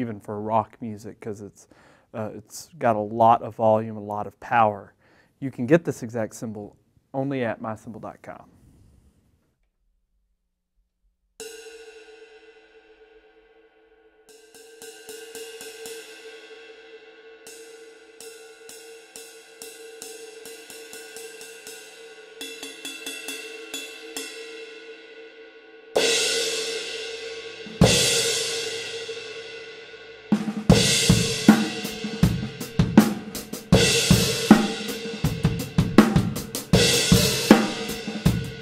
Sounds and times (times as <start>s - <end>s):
Speech: 0.0s - 8.5s.